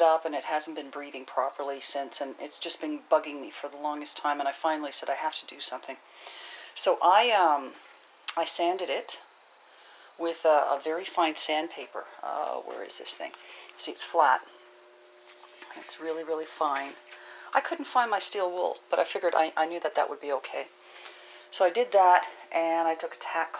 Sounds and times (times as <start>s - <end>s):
Speech: 0.0s - 6.0s, 6.8s - 9.2s, 10.2s - 14.4s, 15.7s - 20.7s, 21.5s - 23.5s.